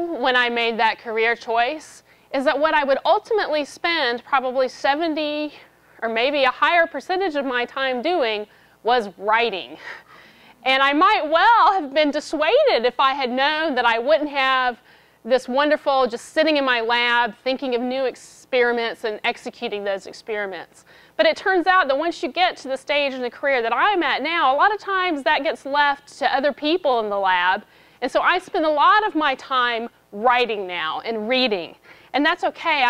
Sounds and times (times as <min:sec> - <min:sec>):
Speech: 0:00.0 - 0:09.8, 0:10.6 - 0:32.8.